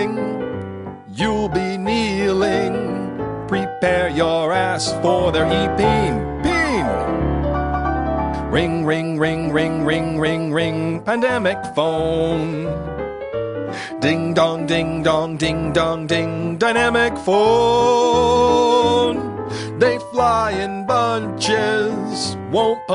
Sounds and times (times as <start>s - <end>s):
Music: 0.0s - 22.9s.